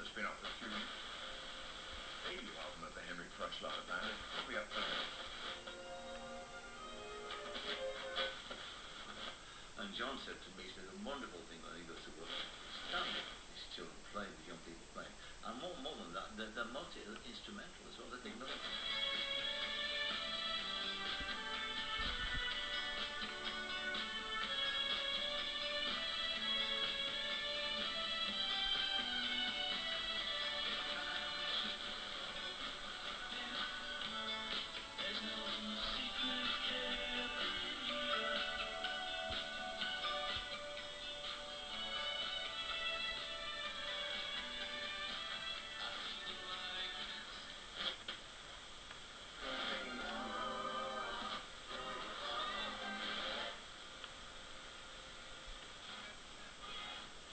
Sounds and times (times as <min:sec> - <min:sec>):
Music: 0:00.0 - 0:09.4, 0:18.2 - 0:48.2, 0:49.4 - 0:57.3.